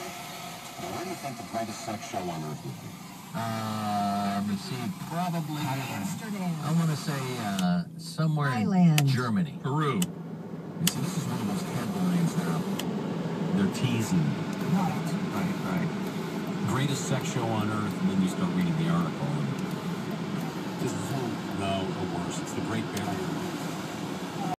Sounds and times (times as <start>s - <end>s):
Speech: 0.8s - 10.1s, 10.8s - 12.8s, 13.5s - 15.9s, 16.6s - 19.6s, 20.8s - 23.4s.